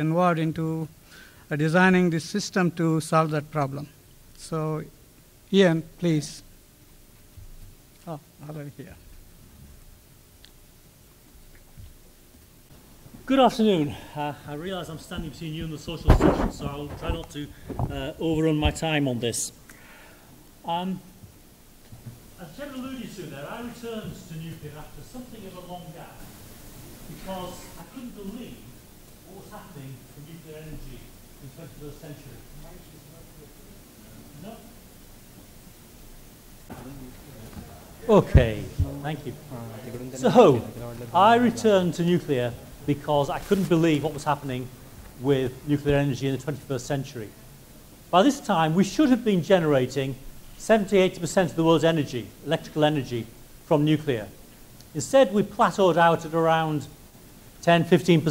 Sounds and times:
Speech: 0.0 - 0.9, 1.5 - 4.9, 5.5 - 6.5, 8.0 - 9.1, 13.2 - 19.6, 20.6 - 21.1, 22.4 - 26.3, 27.1 - 34.8, 36.7 - 47.4, 48.1 - 57.0, 57.6 - 58.3.

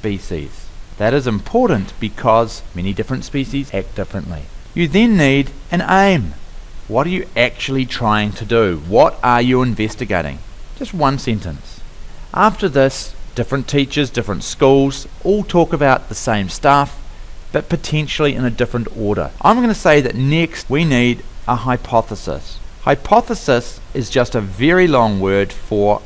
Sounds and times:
Speech: 0.0 - 26.0.

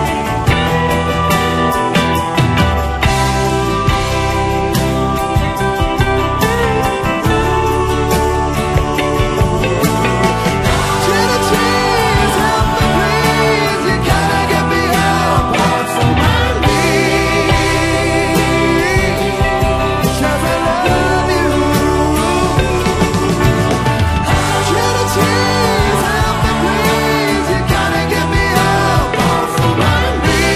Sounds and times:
Music: 0.0 - 30.5.

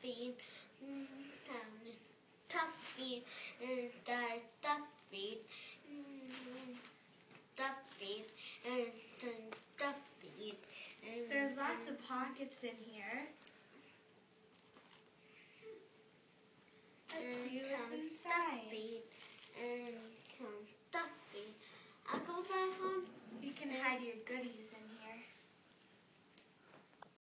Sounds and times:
Speech: 0.0 - 6.9, 7.6 - 13.4, 17.1 - 25.4.

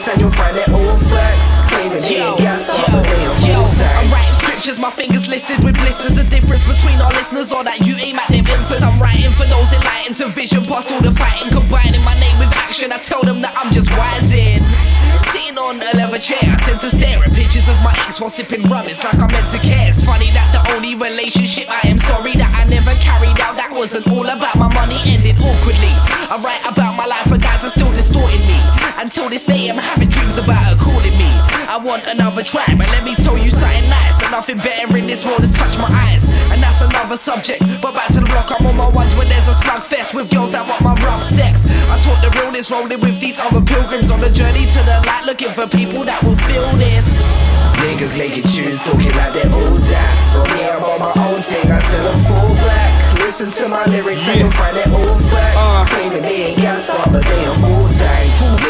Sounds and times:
Music: 0.0 - 58.7.

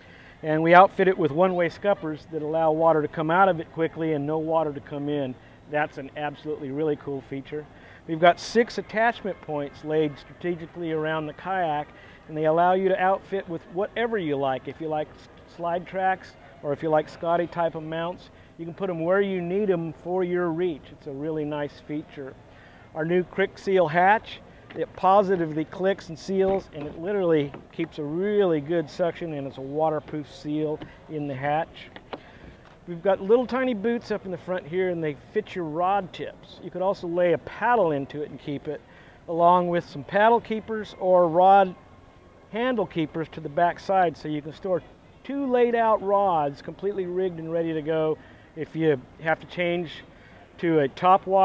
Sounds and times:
Speech: 0.4 - 22.4, 23.0 - 31.9, 32.9 - 41.8, 42.5 - 51.4.

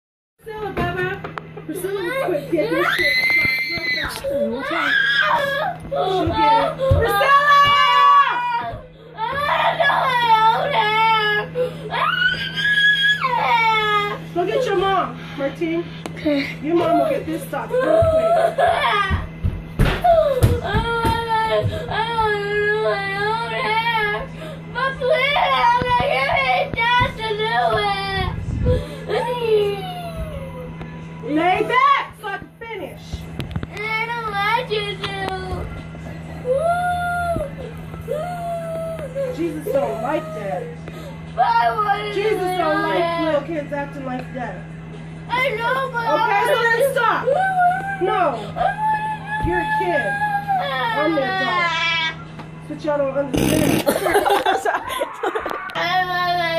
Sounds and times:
Screaming: 4.7 - 5.5, 12.0 - 13.4.

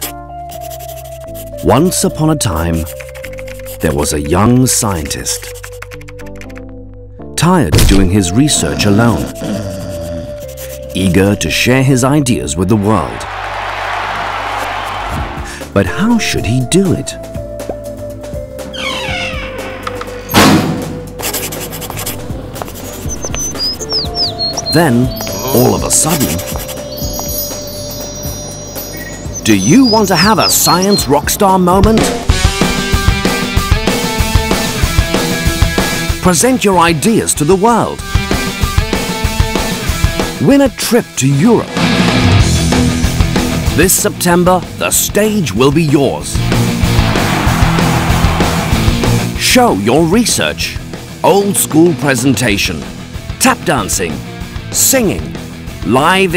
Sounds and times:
Music: 0.0 - 56.3
Speech: 1.6 - 2.9, 3.8 - 5.5, 7.4 - 10.3, 11.0 - 13.2, 15.8 - 17.2, 24.7 - 26.5, 29.5 - 32.2, 36.2 - 38.0, 40.4 - 41.8, 43.8 - 46.4, 49.4 - 54.2, 54.8 - 56.3.

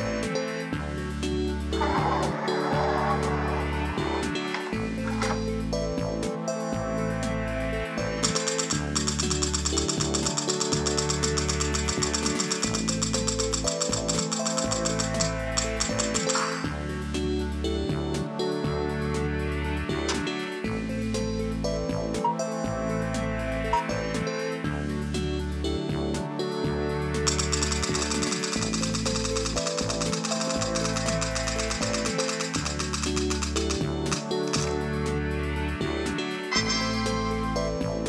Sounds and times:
Music: 0.0 - 38.0.

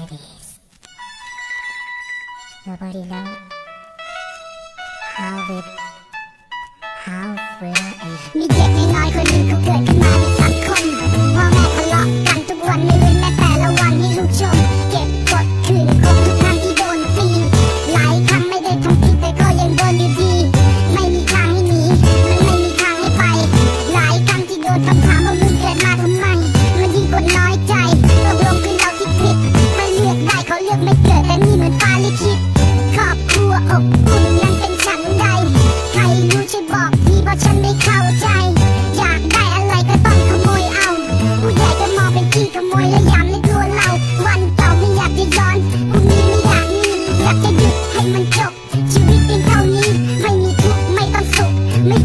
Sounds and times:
Music: 0.5 - 52.0.

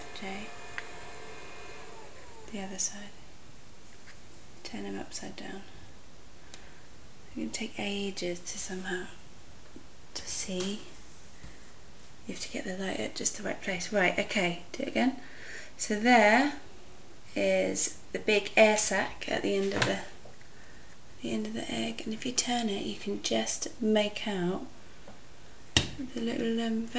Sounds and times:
Speech: 0.2 - 0.5, 2.5 - 3.2, 4.6 - 5.8, 7.3 - 9.2, 10.2 - 10.9, 12.3 - 15.2, 15.8 - 16.6, 17.4 - 20.2, 21.2 - 24.7, 26.0 - 26.9.

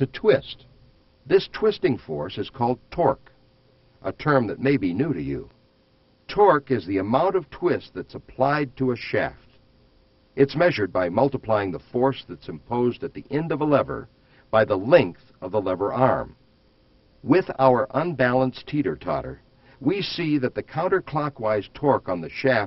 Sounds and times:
Speech: 0.0 - 0.7, 1.3 - 3.3, 4.0 - 5.6, 6.3 - 9.6, 10.4 - 16.4, 17.2 - 22.6.

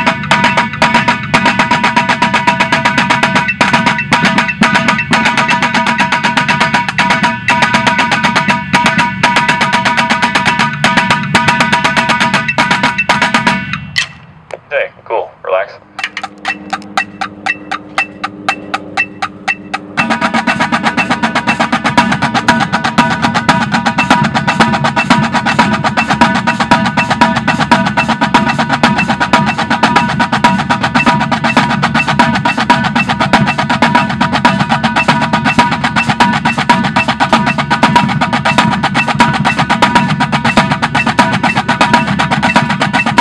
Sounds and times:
Percussion: 0.0 - 14.3, 15.9 - 43.2.

